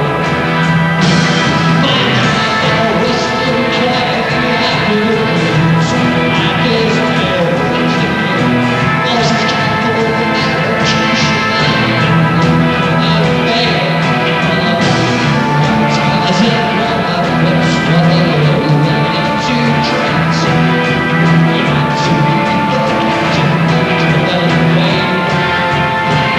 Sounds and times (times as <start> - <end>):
Music: 0.0 - 26.3.